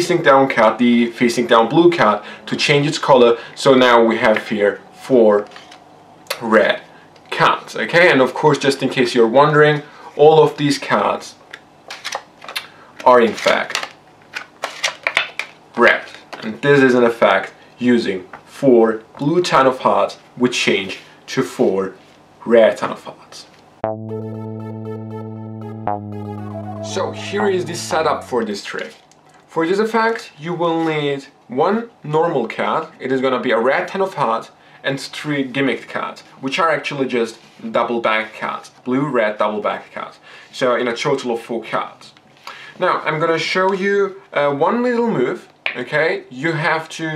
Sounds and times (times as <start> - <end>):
Speech: 0.0 - 5.6, 6.3 - 11.4, 13.0 - 13.8, 15.8 - 23.5, 26.8 - 29.0, 29.6 - 42.2, 42.8 - 47.1.